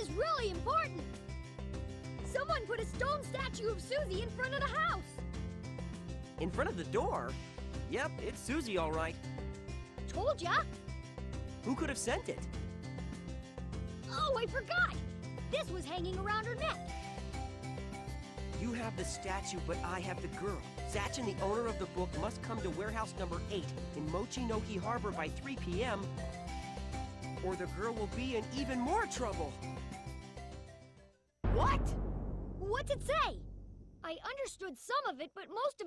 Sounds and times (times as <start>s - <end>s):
Music: 0.0s - 34.1s
Speech: 7.9s - 9.2s, 11.7s - 12.4s, 18.6s - 26.1s, 27.4s - 29.6s, 31.5s - 32.0s, 34.0s - 35.8s.